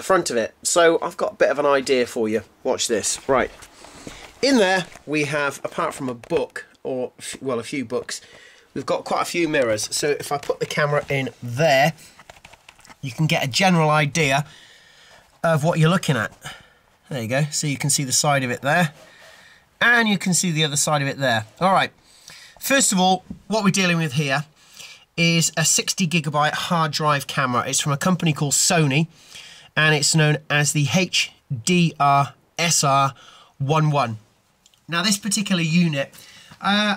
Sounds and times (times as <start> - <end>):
Speech: 0.0 - 3.6, 4.4 - 8.2, 8.8 - 12.0, 13.0 - 14.5, 15.4 - 16.4, 17.1 - 19.0, 19.8 - 21.9, 22.6 - 24.5, 25.2 - 29.1, 29.8 - 34.2, 34.9 - 36.9.